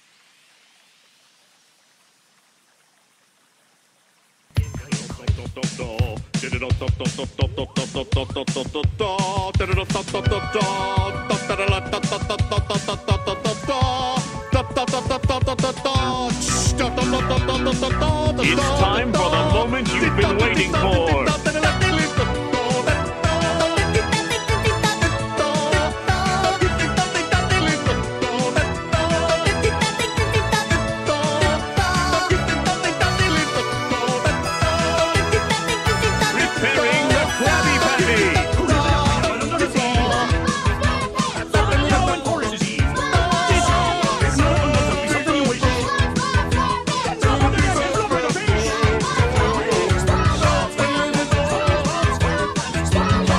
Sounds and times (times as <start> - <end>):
Music: 4.6 - 53.3.